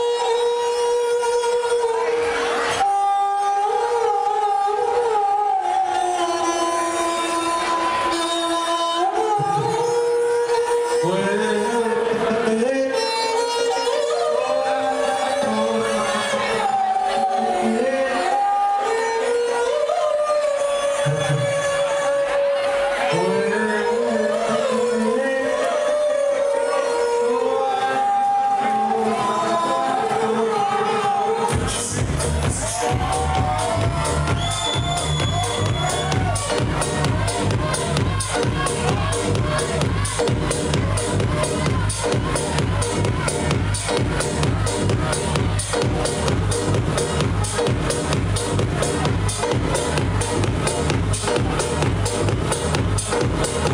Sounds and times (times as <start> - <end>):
House music: 0.0 - 53.7.